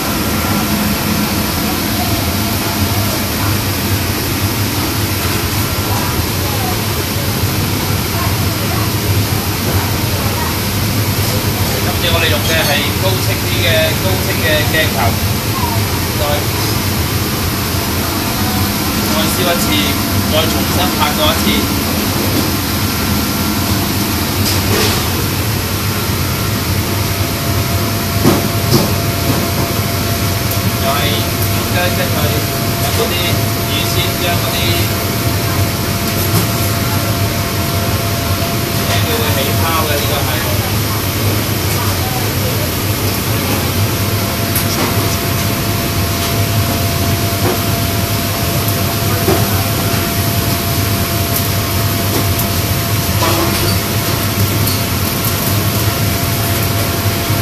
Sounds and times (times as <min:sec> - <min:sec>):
Speech: 0:05.2 - 0:16.8, 0:18.3 - 0:22.2, 0:30.8 - 0:43.8.